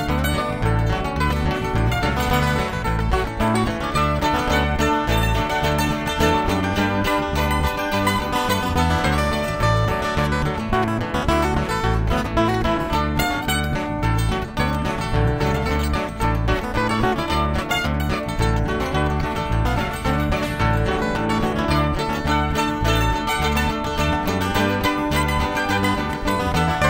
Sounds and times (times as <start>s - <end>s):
Music: 0.0s - 26.9s.